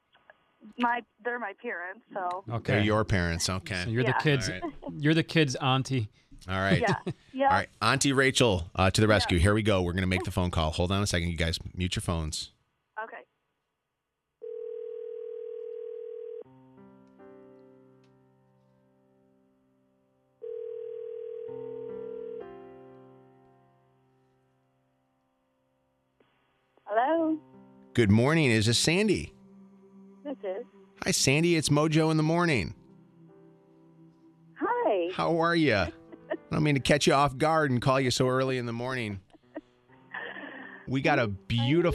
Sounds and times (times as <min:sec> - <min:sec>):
Speech: 0:00.7 - 0:13.2, 0:26.9 - 0:27.4, 0:28.0 - 0:29.3, 0:30.3 - 0:32.8, 0:34.6 - 0:39.2, 0:40.9 - 0:41.9
Dial tone: 0:14.4 - 0:16.5, 0:20.4 - 0:22.4.